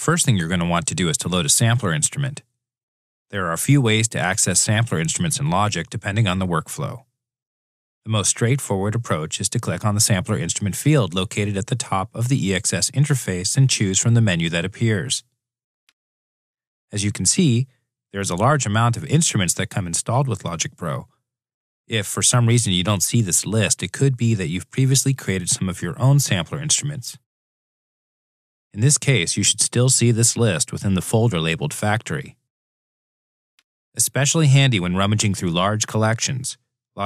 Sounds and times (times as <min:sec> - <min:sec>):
Speech: 0:00.0 - 0:02.4, 0:03.3 - 0:07.0, 0:08.1 - 0:15.2, 0:16.9 - 0:21.1, 0:21.9 - 0:27.3, 0:28.8 - 0:32.4, 0:34.0 - 0:37.0.